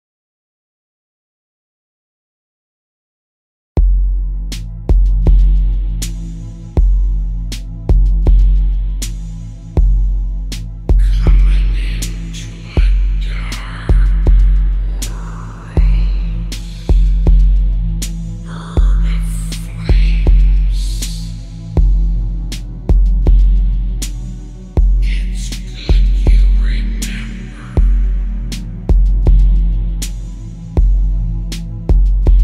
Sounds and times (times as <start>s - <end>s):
Music: 3.8s - 32.4s.